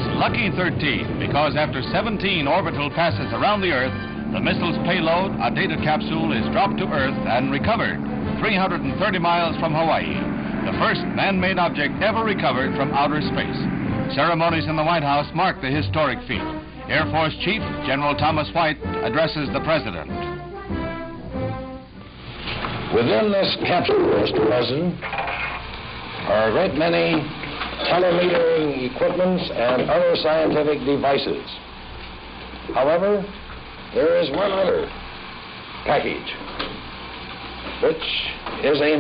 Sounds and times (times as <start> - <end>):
Speech: 0.0 - 20.1, 22.9 - 25.0, 26.2 - 31.6, 32.7 - 34.9, 35.8 - 36.4, 37.8 - 39.0.